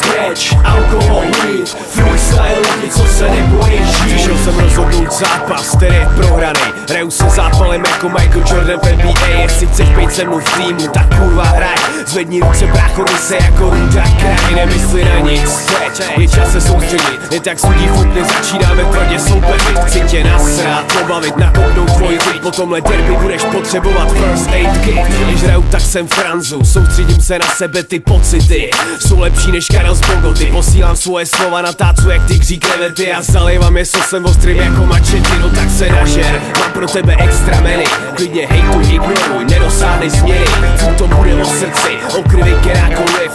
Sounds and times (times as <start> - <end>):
Music: 0.0 - 43.3.